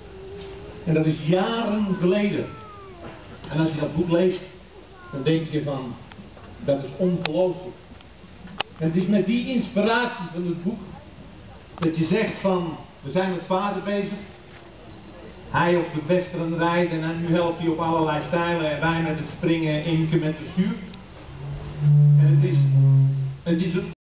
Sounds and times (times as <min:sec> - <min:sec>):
Speech: 0:08.8 - 0:14.3, 0:22.2 - 0:24.0.